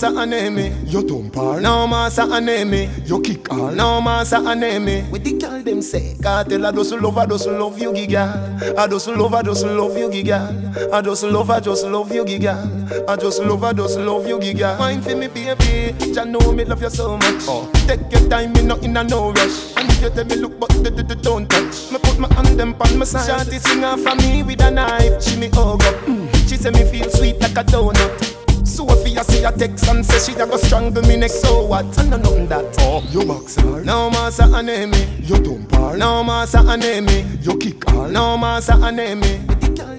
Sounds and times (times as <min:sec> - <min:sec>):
Hip hop music: 0:00.0 - 0:39.9
Reggae: 0:00.0 - 0:39.9.